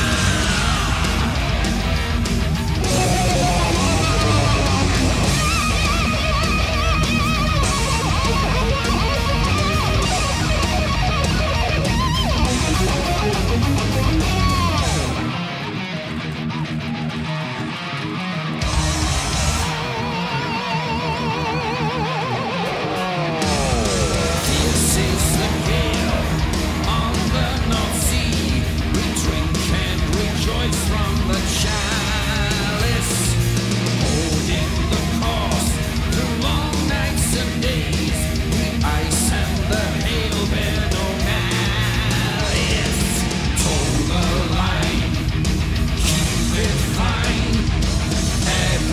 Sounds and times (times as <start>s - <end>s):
Guitar: 0.0s - 48.9s.